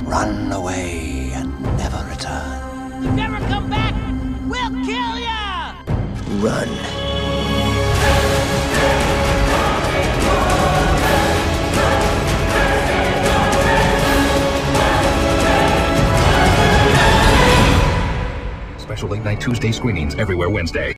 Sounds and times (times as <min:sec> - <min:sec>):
Speech: 0:00.0 - 0:06.9, 0:18.8 - 0:20.9
Music: 0:00.0 - 0:20.9.